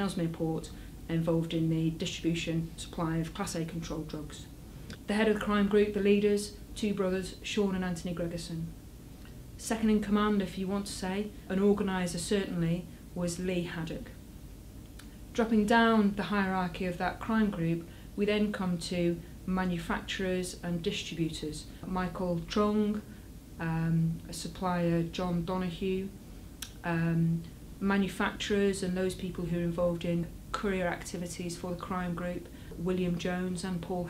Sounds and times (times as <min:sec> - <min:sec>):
Speech: 0:00.0 - 0:08.7, 0:09.6 - 0:14.2, 0:15.4 - 0:34.0.